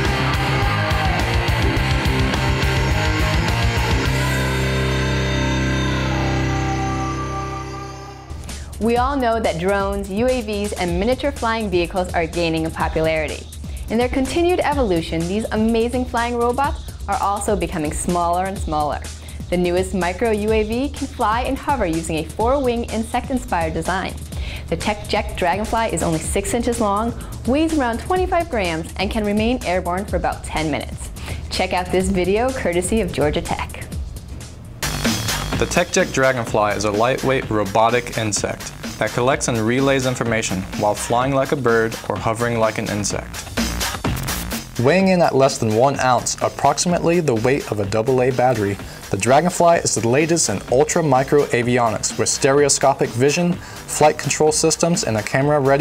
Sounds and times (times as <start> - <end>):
Music: 0.0 - 55.8
Speech: 8.8 - 33.9, 35.6 - 43.3, 44.8 - 55.8.